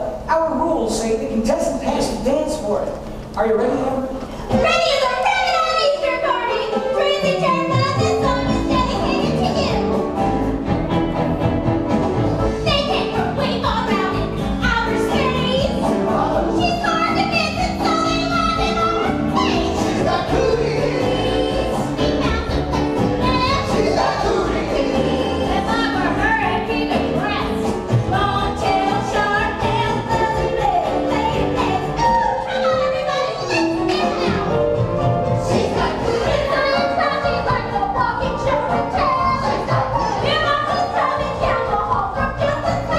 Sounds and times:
Music: 0.0s - 42.9s.

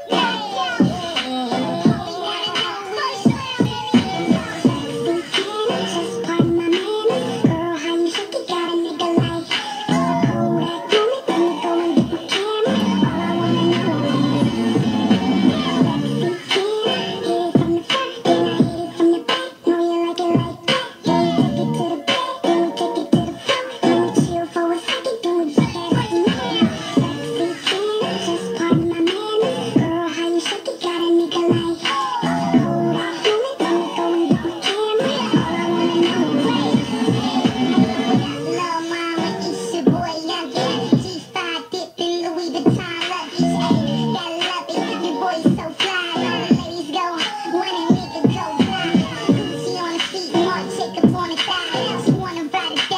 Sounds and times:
Music: 0.0s - 52.9s.

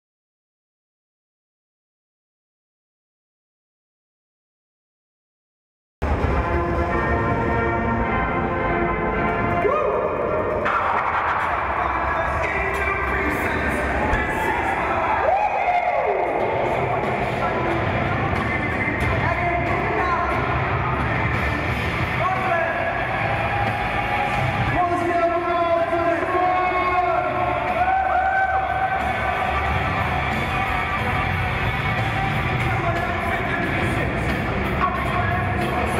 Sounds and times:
Inside, public space: 6.0s - 35.9s
Music: 6.0s - 35.9s
Speech: 11.4s - 20.6s, 22.2s - 23.1s, 24.7s - 27.7s, 32.5s - 35.9s.

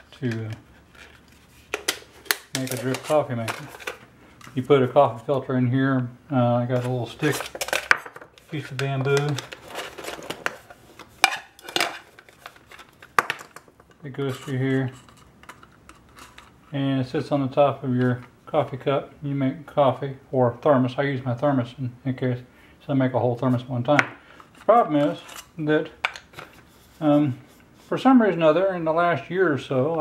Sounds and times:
Speech: 0.0s - 0.6s, 2.5s - 3.7s, 4.5s - 7.5s, 8.5s - 9.5s, 14.0s - 15.0s, 16.7s - 24.1s, 24.7s - 26.0s, 27.0s - 30.0s.

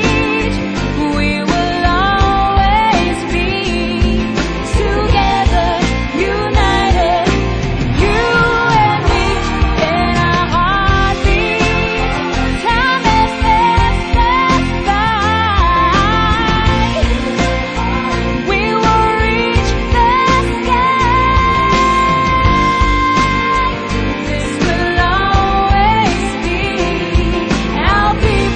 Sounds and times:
Music: 0.0s - 28.5s.

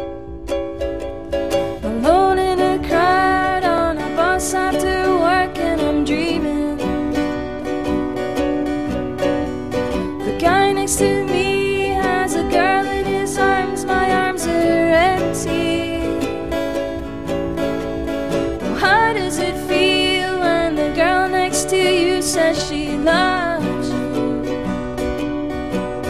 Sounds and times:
Music: 0.0s - 26.1s.

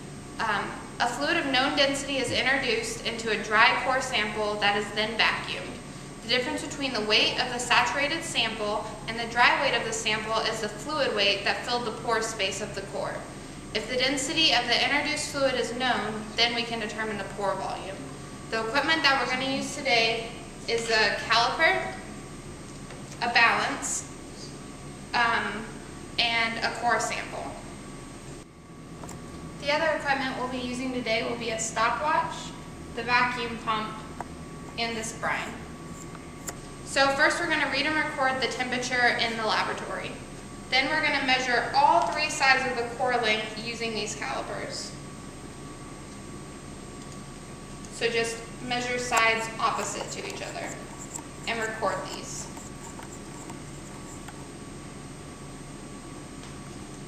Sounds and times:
Speech: 0.4s - 22.0s, 23.2s - 24.1s, 25.2s - 27.6s, 29.6s - 34.1s, 34.8s - 35.6s, 36.9s - 45.0s, 47.9s - 50.8s, 51.5s - 52.5s.

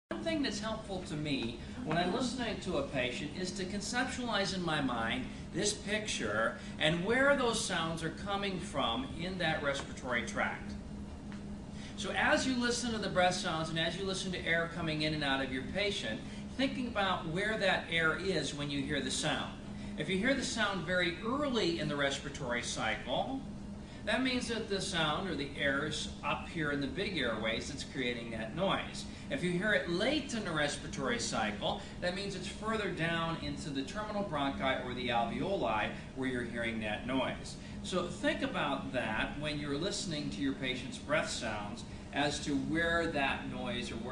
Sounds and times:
Speech: 0.1s - 10.8s, 12.0s - 44.1s.

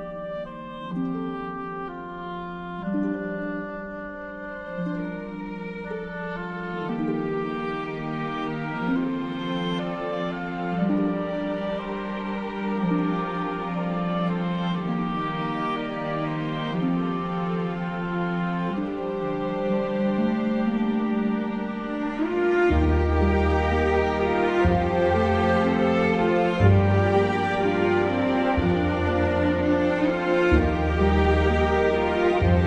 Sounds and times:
Tender music: 0.0s - 32.6s.

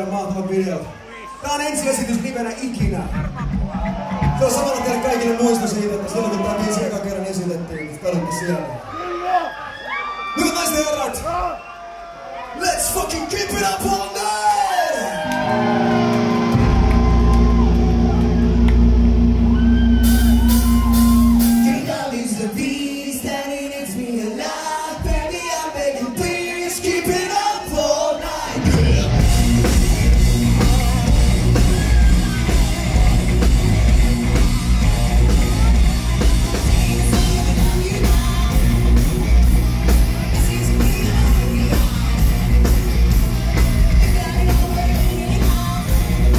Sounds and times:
Music: 15.2s - 24.2s, 24.9s - 46.3s.

